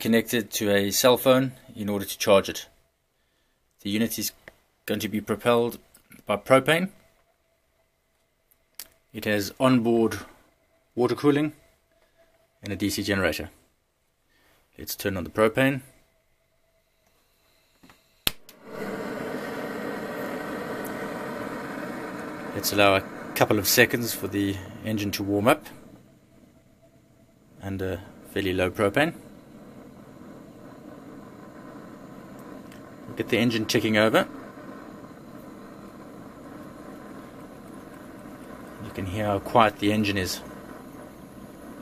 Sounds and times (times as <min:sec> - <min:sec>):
Speech: 0:00.0 - 0:02.8, 0:03.8 - 0:07.0, 0:09.2 - 0:10.3, 0:11.0 - 0:11.6, 0:12.6 - 0:13.6, 0:14.8 - 0:15.9, 0:22.6 - 0:25.8, 0:27.6 - 0:29.2, 0:33.1 - 0:34.3, 0:38.8 - 0:40.5.